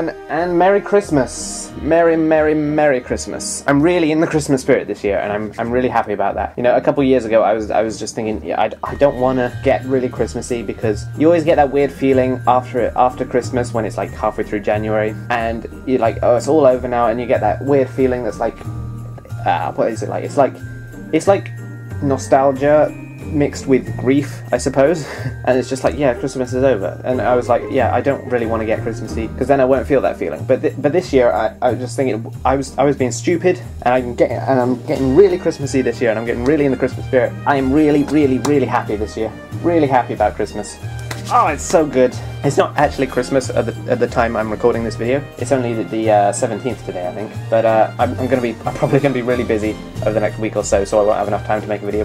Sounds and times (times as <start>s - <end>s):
Music: 0.0s - 52.0s
Speech: 0.0s - 52.0s.